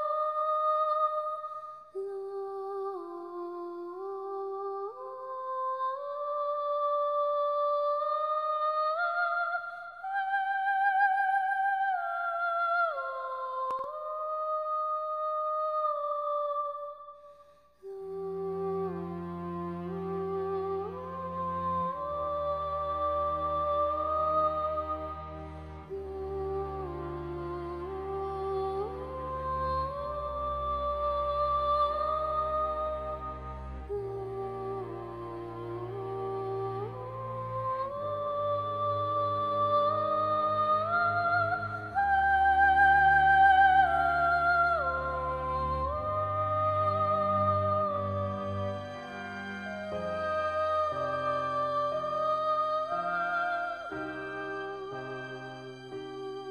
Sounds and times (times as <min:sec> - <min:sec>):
Sad music: 0:17.8 - 0:56.5.